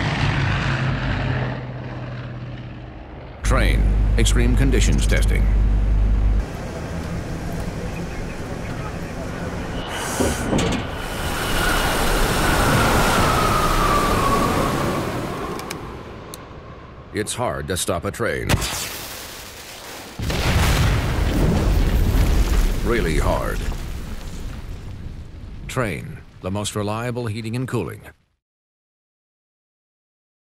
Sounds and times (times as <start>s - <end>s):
Speech: 3.4s - 5.6s, 7.5s - 9.6s, 17.1s - 18.5s, 22.8s - 23.7s, 25.7s - 28.2s.